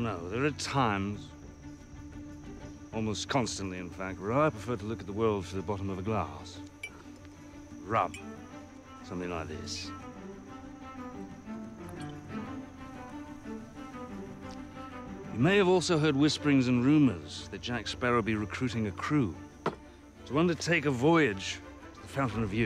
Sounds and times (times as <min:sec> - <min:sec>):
Music: 0:00.0 - 0:22.6
Speech: 0:03.0 - 0:06.6, 0:09.1 - 0:09.9, 0:15.4 - 0:19.4, 0:20.3 - 0:22.6.